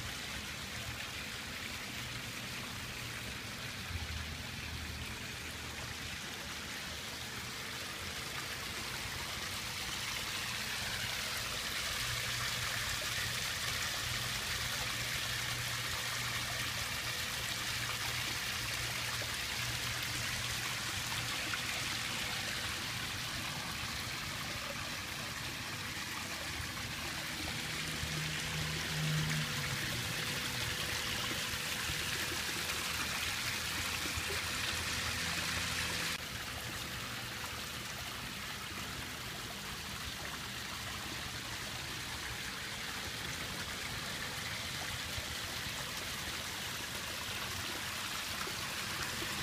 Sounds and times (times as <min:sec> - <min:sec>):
Water: 0:00.0 - 0:49.4.